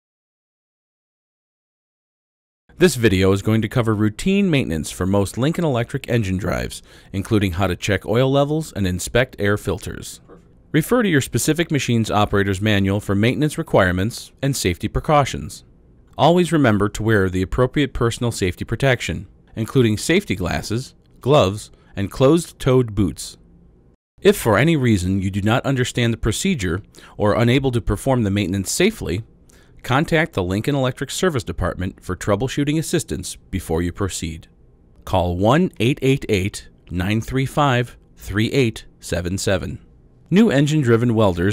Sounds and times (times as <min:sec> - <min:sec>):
Speech: 0:02.8 - 0:23.4, 0:24.2 - 0:41.5.